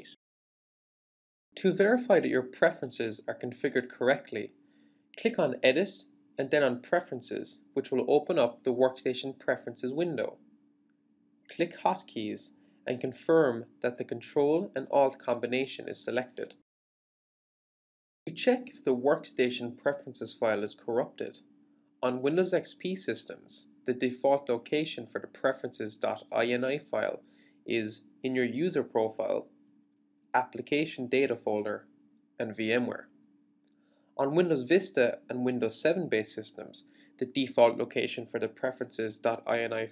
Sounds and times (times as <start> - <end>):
Speech: 0.0 - 0.2, 1.6 - 4.5, 5.2 - 10.4, 11.5 - 16.6, 18.3 - 21.4, 22.0 - 29.5, 30.4 - 31.8, 32.4 - 33.1, 34.2 - 39.9.